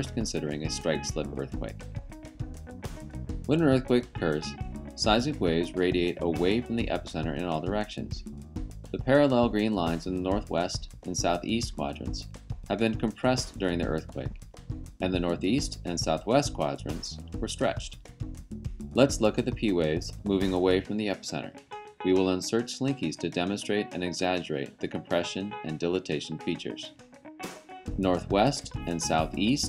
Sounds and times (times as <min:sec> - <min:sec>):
Speech: 0:00.0 - 0:01.8, 0:03.5 - 0:08.2, 0:09.0 - 0:14.3, 0:15.0 - 0:18.0, 0:19.0 - 0:26.9, 0:28.0 - 0:29.6
Music: 0:00.0 - 0:29.6.